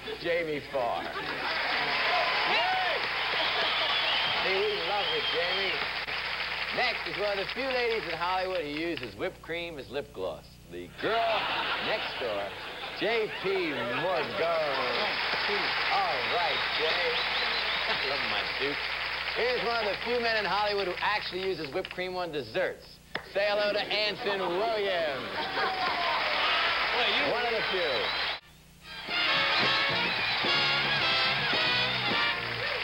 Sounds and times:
Speech: 0:06.8 - 0:17.2, 0:19.4 - 0:25.4.

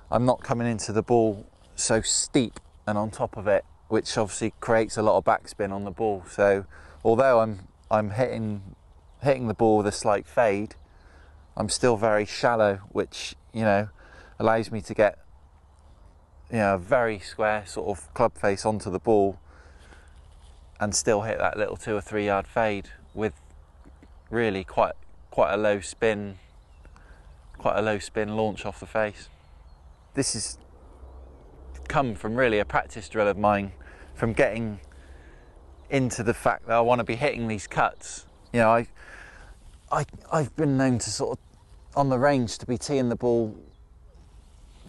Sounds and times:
Speech: 0:00.0 - 0:10.8, 0:11.6 - 0:15.2, 0:16.5 - 0:19.4, 0:20.8 - 0:26.4, 0:27.6 - 0:29.4, 0:30.1 - 0:30.6, 0:31.8 - 0:34.9, 0:35.9 - 0:39.0, 0:39.9 - 0:43.7.

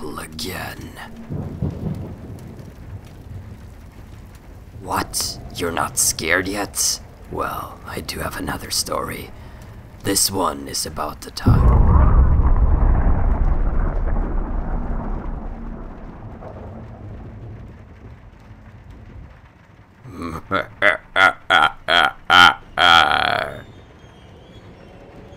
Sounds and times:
Speech: 0:00.0 - 0:01.2, 0:04.8 - 0:09.4, 0:10.0 - 0:11.8, 0:22.9 - 0:23.6.

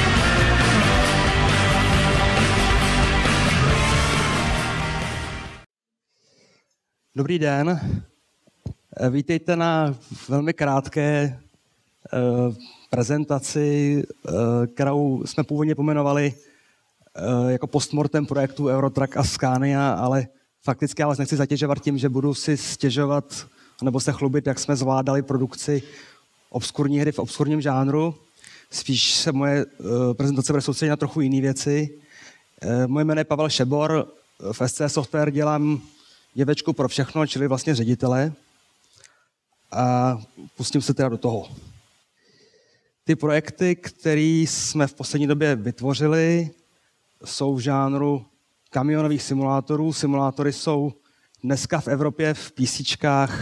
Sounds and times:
Speech: 0:07.2 - 0:08.1, 0:08.7 - 0:16.5, 0:17.2 - 0:25.9, 0:26.6 - 0:32.0, 0:32.6 - 0:38.4, 0:39.7 - 0:41.7, 0:43.1 - 0:46.6, 0:47.2 - 0:53.4.

